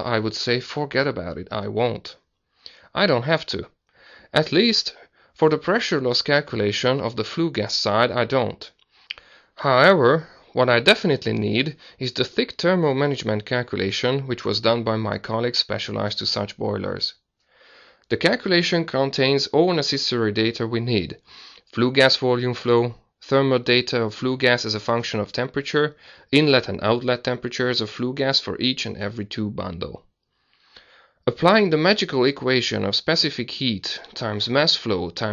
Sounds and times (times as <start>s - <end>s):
Speech: 0.0s - 2.2s, 2.8s - 3.7s, 4.3s - 8.8s, 9.6s - 17.2s, 18.1s - 30.1s, 31.3s - 35.3s.